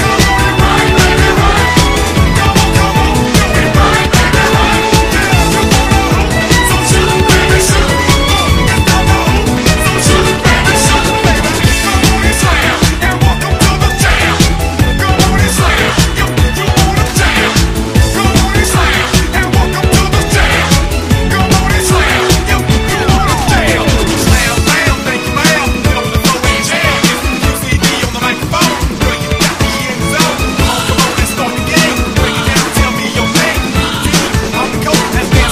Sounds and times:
Soundtrack music: 0.0 - 35.5.

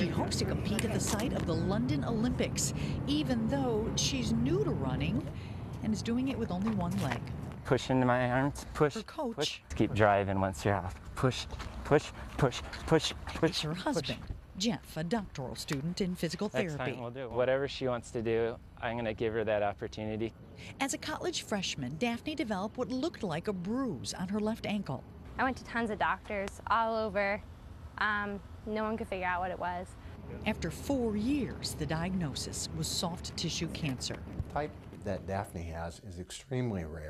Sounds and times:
Speech: 7.8 - 20.3.

